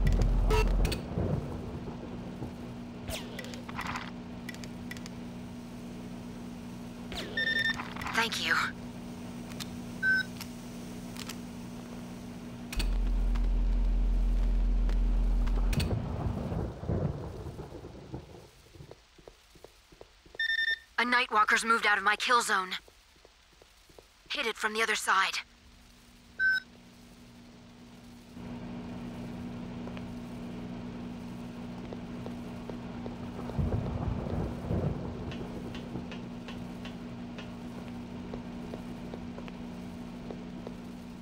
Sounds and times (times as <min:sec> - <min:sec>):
Speech: 0:08.1 - 0:08.8, 0:21.0 - 0:22.8, 0:24.3 - 0:25.5.